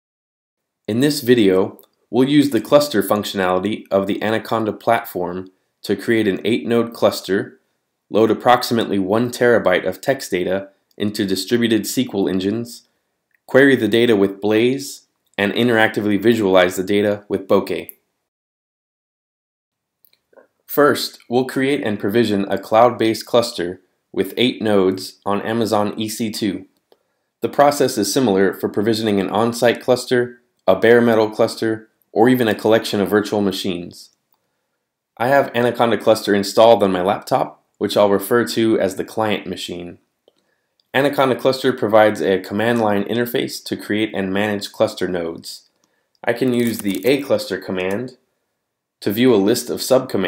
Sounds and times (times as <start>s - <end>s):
Speech: 0.9s - 12.9s, 13.5s - 18.0s, 20.7s - 26.7s, 27.4s - 34.1s, 35.2s - 40.0s, 40.9s - 48.2s, 49.0s - 50.2s.